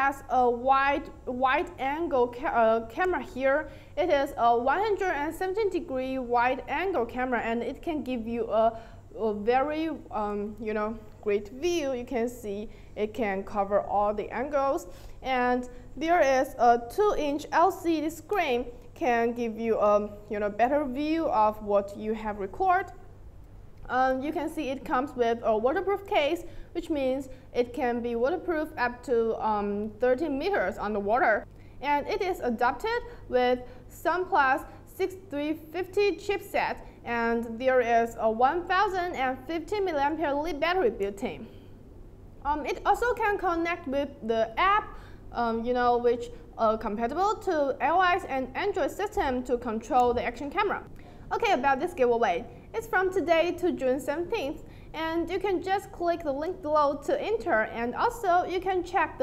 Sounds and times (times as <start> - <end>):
Speech: 0.0 - 23.0, 23.9 - 41.5, 42.5 - 59.2.